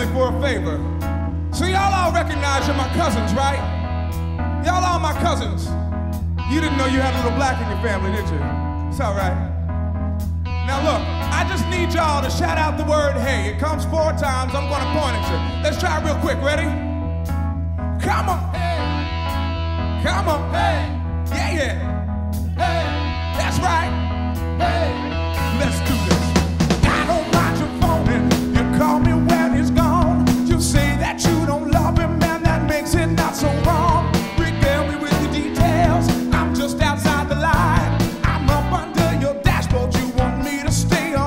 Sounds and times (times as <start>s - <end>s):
Speech: 0.0s - 0.8s, 1.6s - 3.7s, 4.6s - 5.7s, 6.5s - 9.5s, 10.7s - 16.8s, 18.0s - 18.9s, 20.0s - 21.8s, 23.4s - 24.0s, 25.5s - 26.2s
Music: 0.0s - 41.2s.